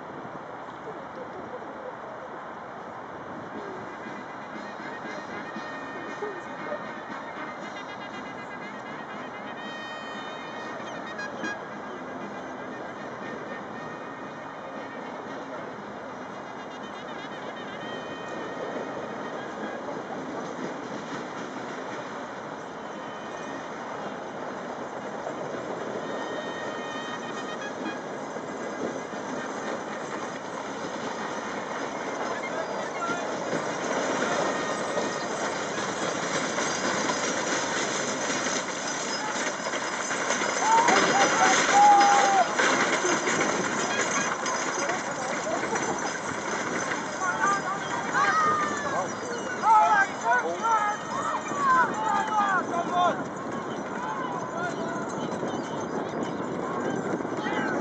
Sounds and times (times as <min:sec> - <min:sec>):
Clip-clop: 0:03.2 - 0:57.8.